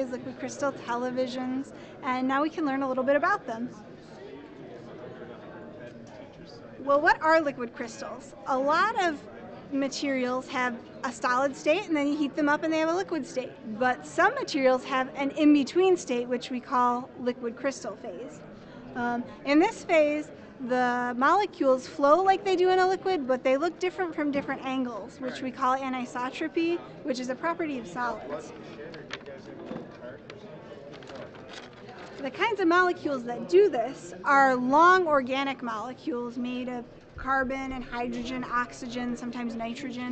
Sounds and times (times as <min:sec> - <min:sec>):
Speech: 0:00.0 - 0:18.4, 0:19.0 - 0:30.4, 0:32.0 - 0:40.1.